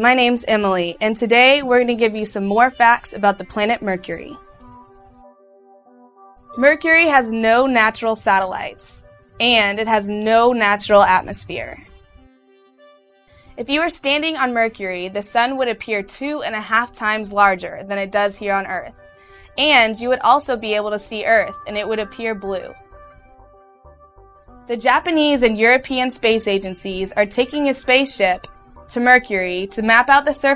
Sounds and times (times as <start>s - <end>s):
Speech: 0.0s - 4.4s, 6.6s - 11.8s, 13.6s - 18.9s, 19.6s - 22.8s, 24.7s - 30.5s
Music: 0.0s - 30.5s.